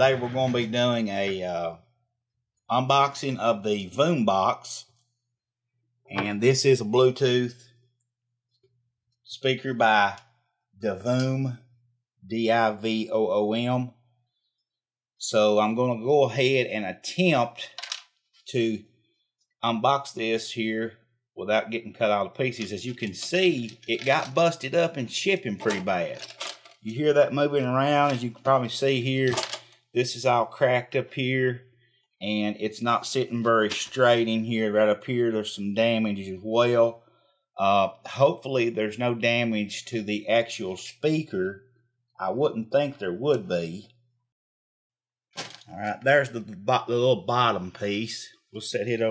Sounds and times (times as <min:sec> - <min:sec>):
Speech: 0:00.0 - 0:01.8, 0:02.7 - 0:05.0, 0:06.1 - 0:07.7, 0:09.3 - 0:14.0, 0:15.2 - 0:17.8, 0:18.5 - 0:18.9, 0:19.6 - 0:31.6, 0:32.2 - 0:37.0, 0:37.6 - 0:41.6, 0:42.2 - 0:43.9, 0:45.6 - 0:49.1.